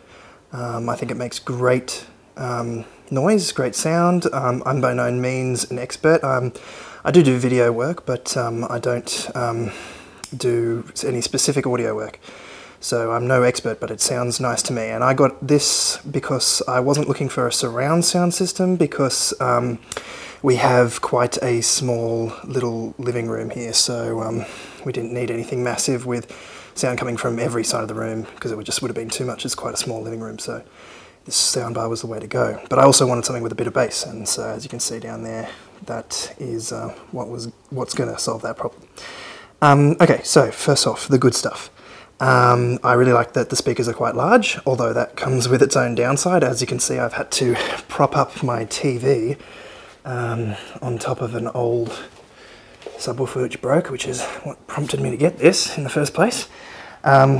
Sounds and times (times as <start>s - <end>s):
Speech: 0.5s - 12.2s, 12.8s - 38.8s, 39.6s - 49.4s, 50.0s - 52.2s, 52.9s - 57.3s.